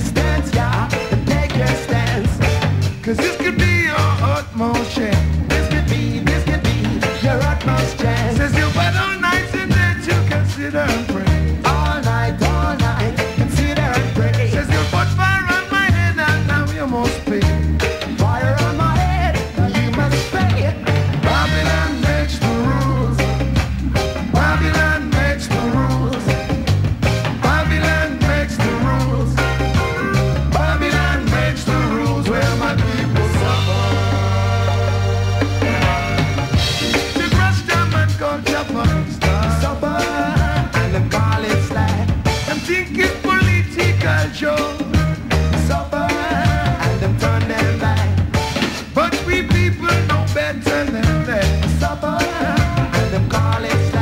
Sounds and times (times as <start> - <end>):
Drum: 0.0 - 54.0
Ska: 0.0 - 54.0
Singing: 3.0 - 23.4, 24.2 - 26.6, 27.3 - 34.8, 37.0 - 48.2, 49.0 - 54.0.